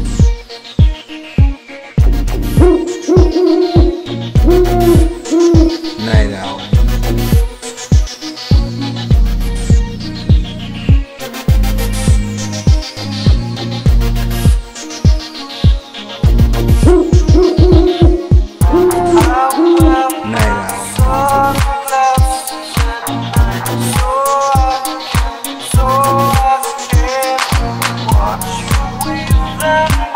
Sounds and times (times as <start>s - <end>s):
Hoot: 2.6s - 6.3s, 16.8s - 20.9s.